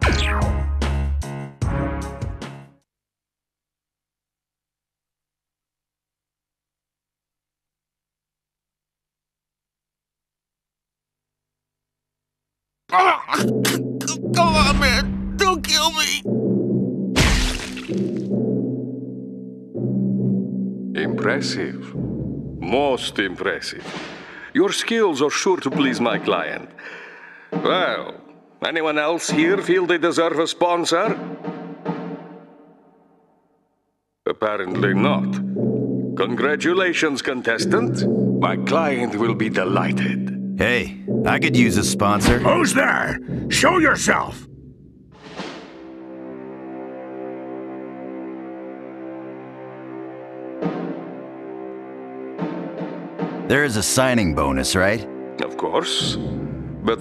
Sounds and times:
Timpani: 0:13.4 - 0:19.1, 0:27.5 - 0:28.4, 0:29.2 - 0:33.3, 0:37.6 - 0:46.8, 0:50.1 - 0:57.0.

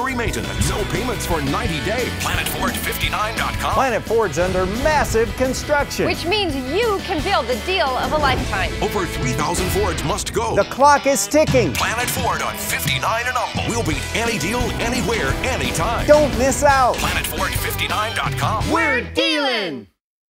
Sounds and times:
Speech: 0:00.0 - 0:19.9
Music: 0:00.0 - 0:20.0.

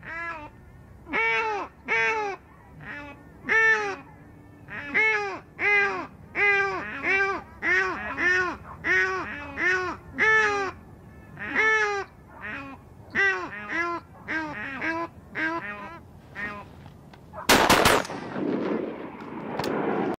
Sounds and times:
Honk: 0:04.7 - 0:10.8, 0:11.4 - 0:16.6
Gunshot, gunfire: 0:17.5 - 0:20.1.

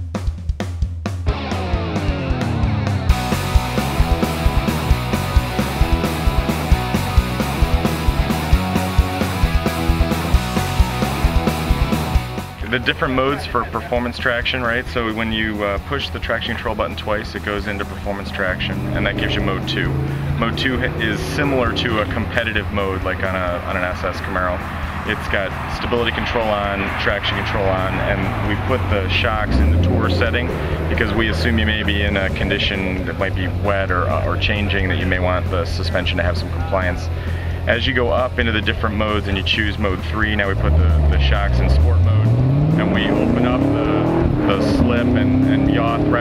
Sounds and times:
Speech: 0:12.6 - 0:46.2.

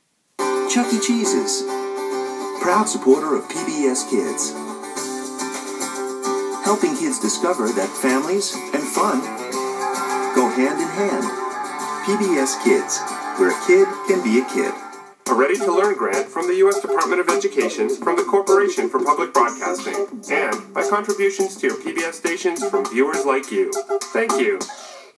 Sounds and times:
Music: 0:00.4 - 0:25.1
Speech: 0:00.7 - 0:01.7, 0:02.6 - 0:04.6, 0:06.6 - 0:09.3, 0:10.4 - 0:11.3, 0:12.1 - 0:24.7.

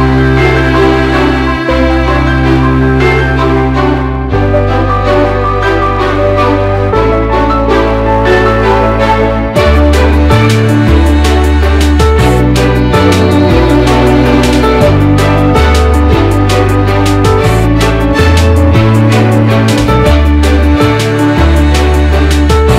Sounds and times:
Music: 0:00.0 - 0:22.7.

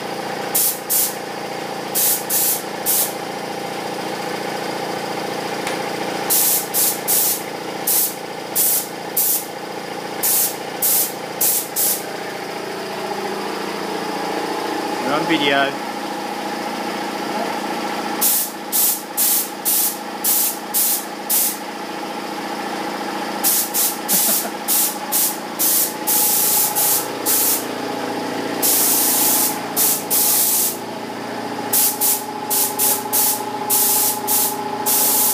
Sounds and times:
Spray: 0:00.6 - 0:01.2, 0:02.0 - 0:03.2, 0:06.3 - 0:09.5, 0:10.2 - 0:12.0, 0:18.2 - 0:21.6, 0:23.4 - 0:27.6, 0:28.6 - 0:30.8, 0:31.8 - 0:35.3
Speech: 0:15.0 - 0:15.8.

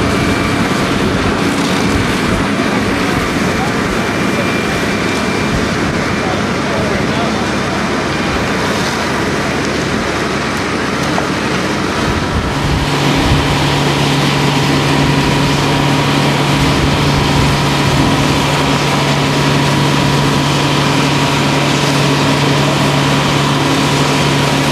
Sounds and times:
Speech: 0:02.3 - 0:09.0.

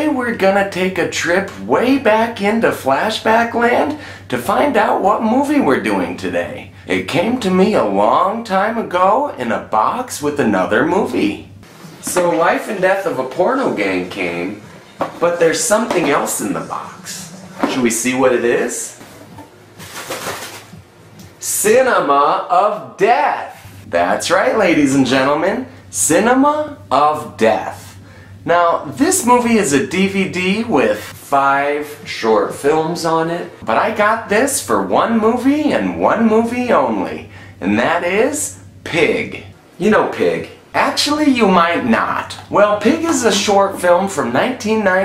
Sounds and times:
Speech: 0:00.0 - 0:19.5, 0:21.4 - 0:45.0.

